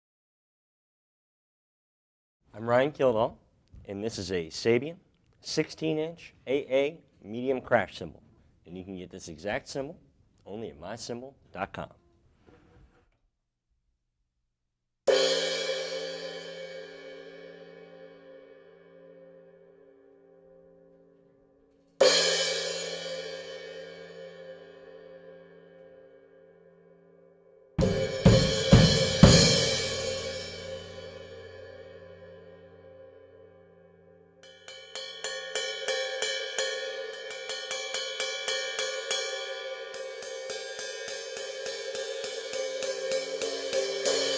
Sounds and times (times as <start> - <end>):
Cymbal: 15.1 - 21.3, 22.0 - 44.3.